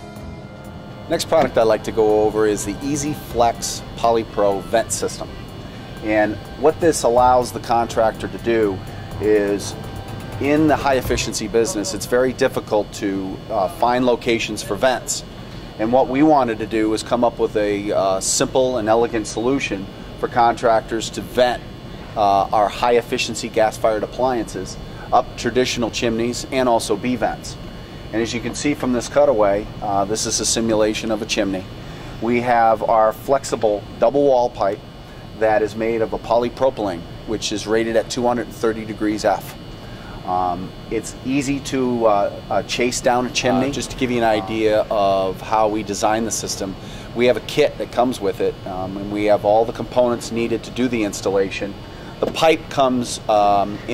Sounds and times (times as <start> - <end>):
Speech: 1.1 - 5.4, 6.0 - 9.8, 10.4 - 21.6, 22.2 - 34.8, 35.4 - 39.6, 40.3 - 53.9.